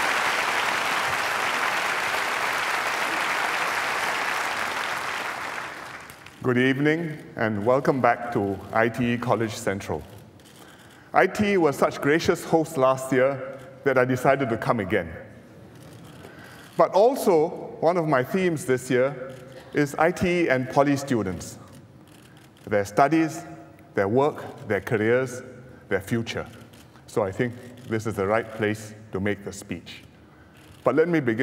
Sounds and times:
Narration, monologue: 6.0s - 31.4s
Male speech, man speaking: 6.4s - 10.1s, 11.2s - 15.3s, 16.8s - 19.2s, 19.8s - 21.6s, 22.7s - 26.5s, 27.1s - 30.1s, 30.9s - 31.4s.

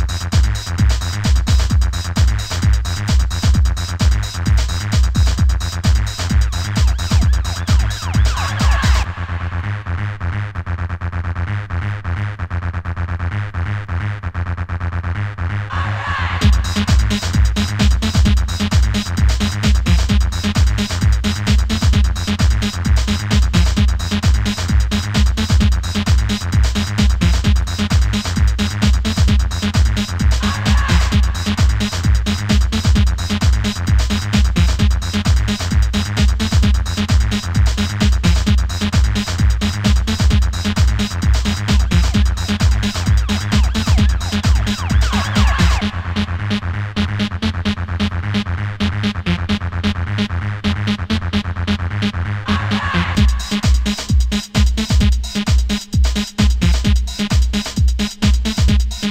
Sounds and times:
Techno: 0.0s - 59.1s.

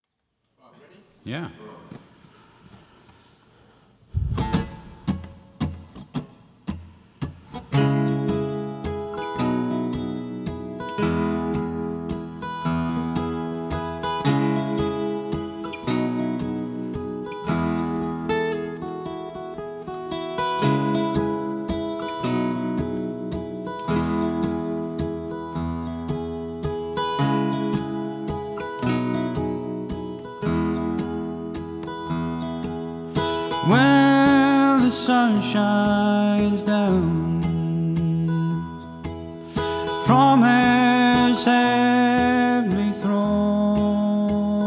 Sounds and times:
Strum: 4.1s - 44.6s.

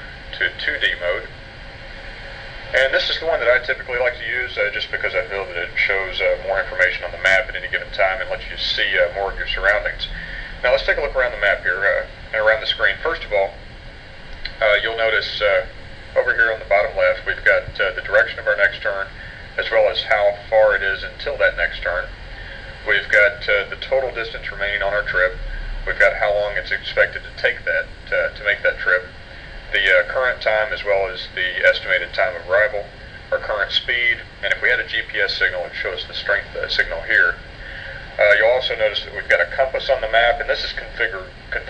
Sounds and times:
Speech: 0.0s - 1.3s, 2.7s - 13.6s, 14.5s - 22.2s, 22.8s - 37.5s, 38.1s - 41.7s.

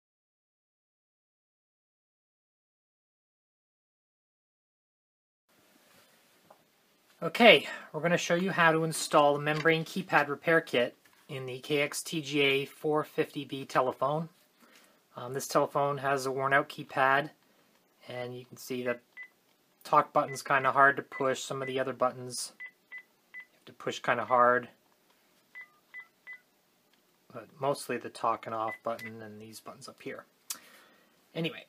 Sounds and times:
Inside, small room: 5.5s - 31.6s
Speech: 7.2s - 14.4s, 15.2s - 17.4s, 18.0s - 19.0s, 19.8s - 22.6s, 23.6s - 24.8s, 27.3s - 30.3s, 31.4s - 31.6s.

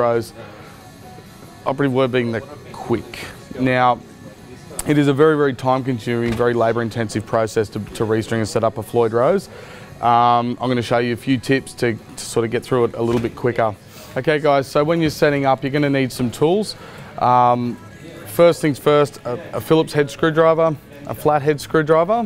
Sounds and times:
Speech: 0.0s - 0.4s, 1.6s - 22.2s
Music: 0.0s - 22.2s.

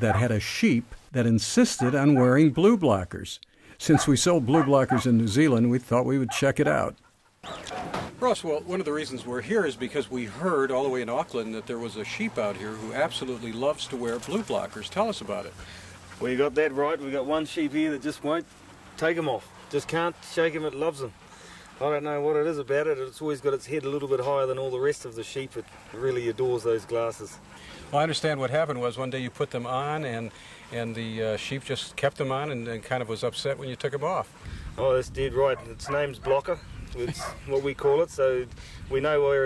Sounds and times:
Speech: 0.0s - 7.0s, 8.2s - 15.5s, 16.2s - 21.2s, 21.8s - 39.4s.

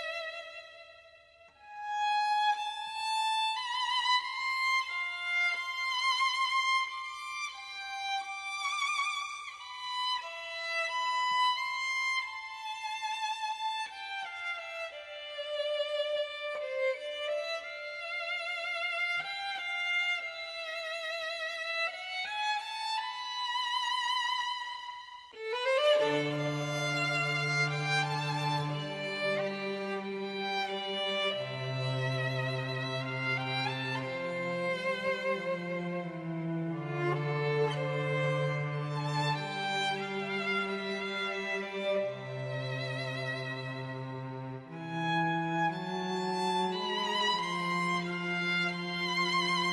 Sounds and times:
Violin, fiddle: 0.0s - 49.7s.

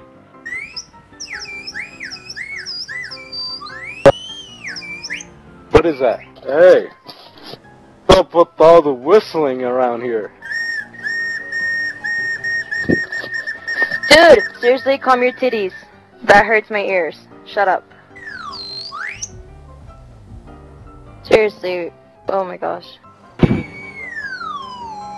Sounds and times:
Whistle: 0.4s - 5.3s, 10.4s - 16.0s, 18.2s - 19.4s, 23.4s - 25.1s.

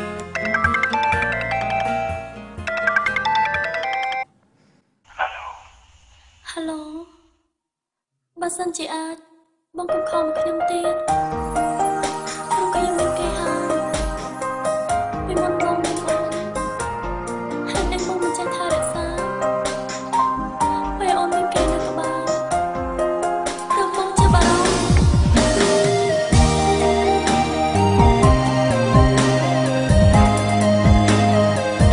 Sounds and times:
Music: 0.0s - 4.3s, 9.8s - 31.9s
Speech: 5.1s - 5.8s, 8.4s - 9.3s.

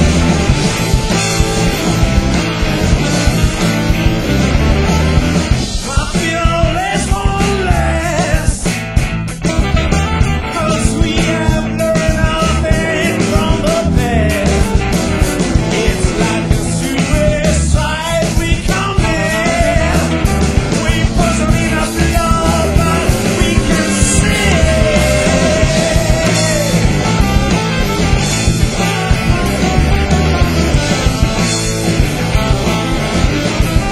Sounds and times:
Music: 0.0s - 33.9s.

